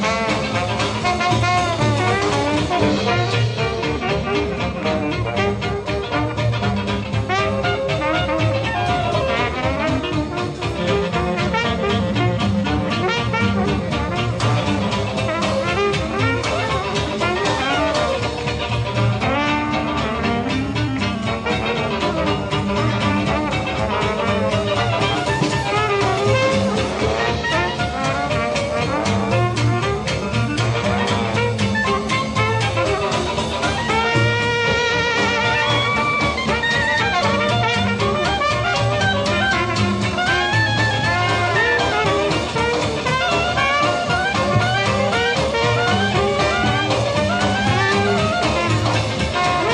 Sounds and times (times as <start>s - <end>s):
Swing music: 0.0s - 49.7s.